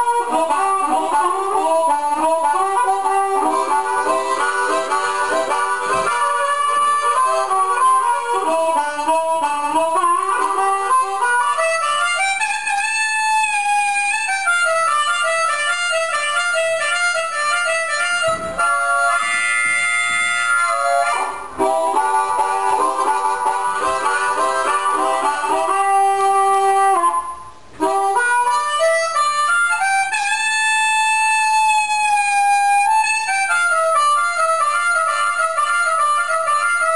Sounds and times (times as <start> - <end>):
Harmonica: 0.0 - 36.9
Wind instrument, woodwind instrument: 0.0 - 36.9.